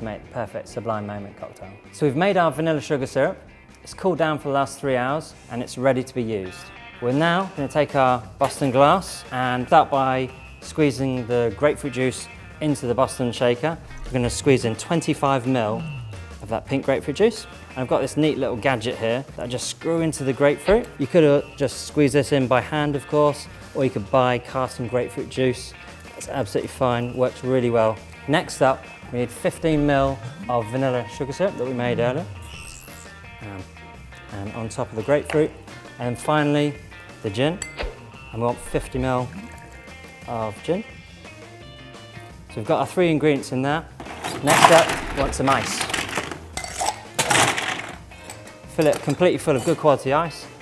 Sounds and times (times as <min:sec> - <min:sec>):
Speech: 0:00.0 - 0:15.8, 0:16.4 - 0:32.3, 0:34.3 - 0:37.6, 0:38.3 - 0:39.5, 0:40.2 - 0:40.9, 0:42.5 - 0:45.8, 0:48.7 - 0:50.6
Music: 0:00.0 - 0:50.6.